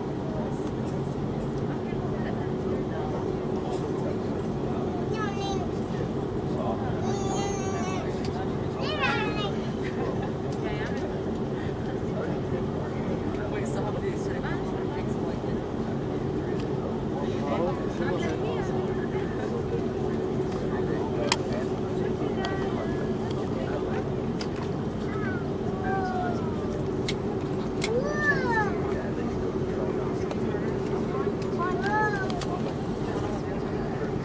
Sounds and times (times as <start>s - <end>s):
Fixed-wing aircraft, airplane: 0.0s - 34.2s
Outside, urban or manmade: 0.0s - 34.2s
Speech: 0.0s - 34.2s.